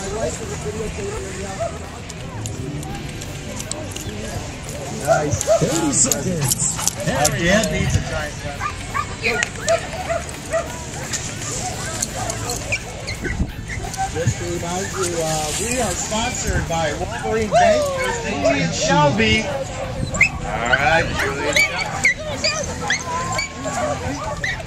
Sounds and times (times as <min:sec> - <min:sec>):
Music: 0:00.0 - 0:18.5.